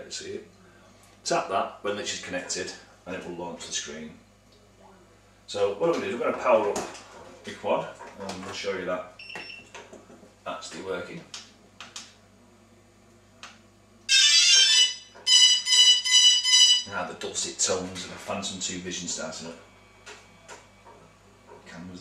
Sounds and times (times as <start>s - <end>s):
Speech: 0.0s - 0.6s, 1.2s - 9.2s, 10.4s - 11.4s, 16.9s - 19.7s, 21.6s - 22.0s.